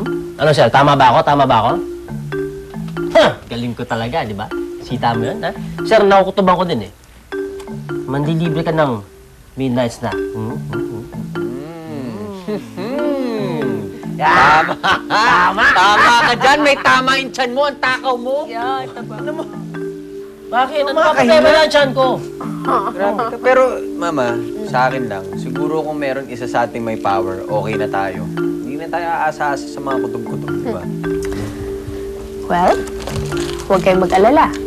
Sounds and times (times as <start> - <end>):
Music: 0.0 - 34.6.